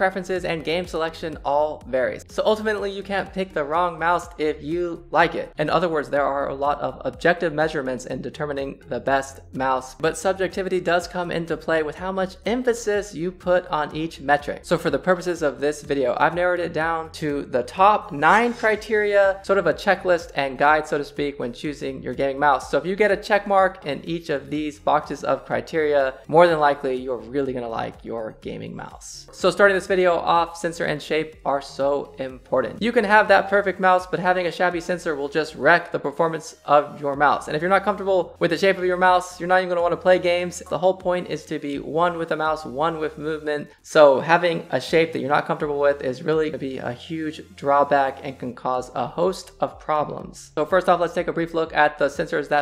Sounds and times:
Music: 0:00.0 - 0:52.6
Speech: 0:00.0 - 0:52.6.

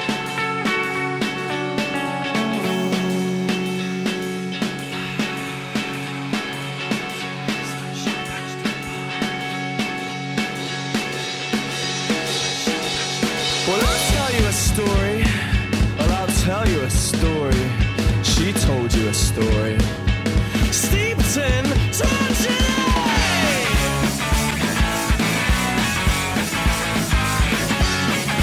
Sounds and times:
Music: 0:00.0 - 0:28.4.

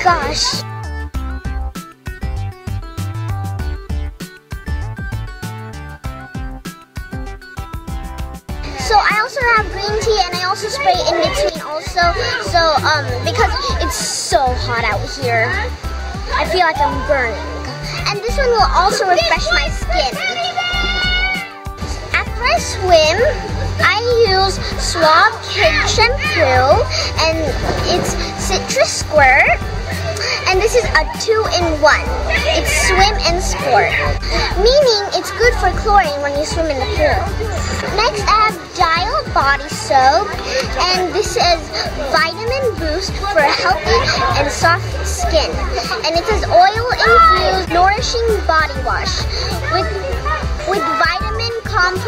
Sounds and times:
Child speech, kid speaking: 0:00.0 - 0:00.7, 0:08.7 - 0:52.0
Music: 0:00.0 - 0:52.0
Outside, urban or manmade: 0:00.0 - 0:52.0.

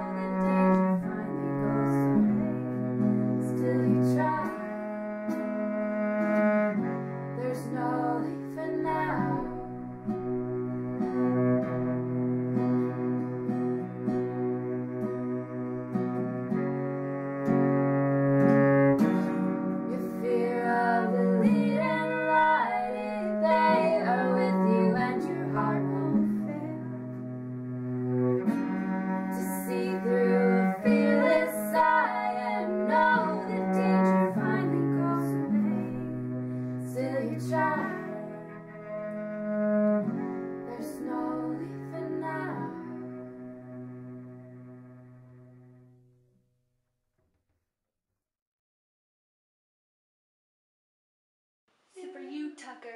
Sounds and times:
Guitar: 0:00.0 - 0:46.0
Double bass: 0:00.0 - 0:46.1
Cello: 0:00.0 - 0:46.2.

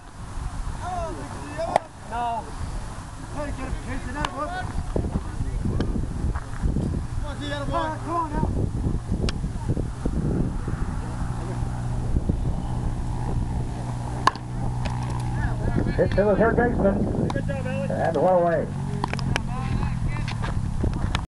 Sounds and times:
Speech: 0:15.4 - 0:20.4.

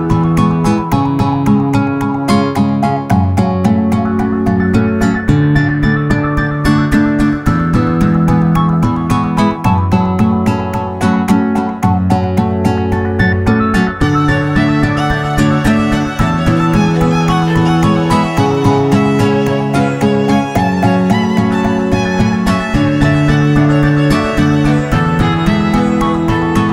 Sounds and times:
Electronica: 0:00.0 - 0:26.7.

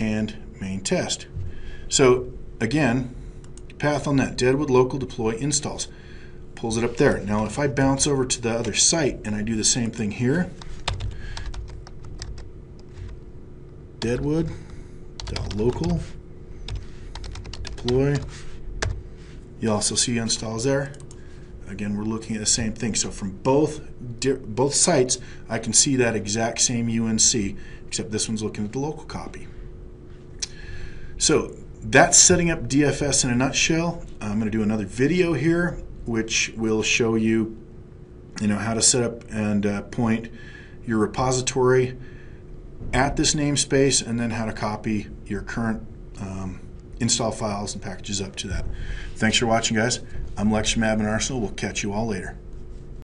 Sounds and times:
Computer keyboard: 0:10.6 - 0:12.5, 0:15.2 - 0:16.0, 0:16.7 - 0:19.0.

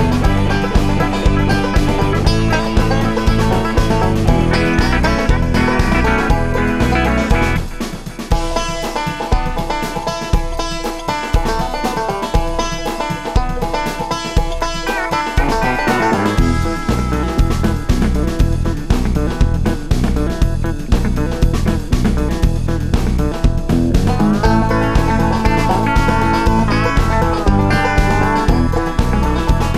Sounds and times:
Banjo: 0:00.0 - 0:29.7.

